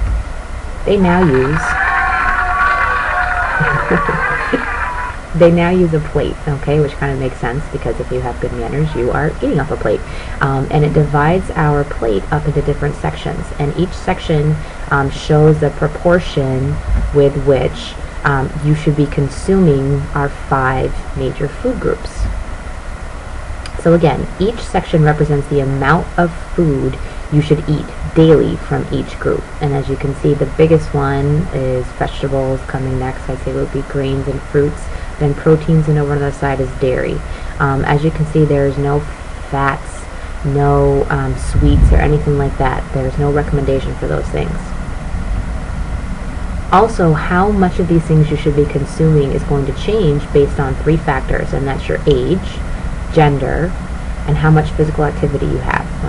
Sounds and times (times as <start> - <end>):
Narration, monologue: 0.0 - 56.0.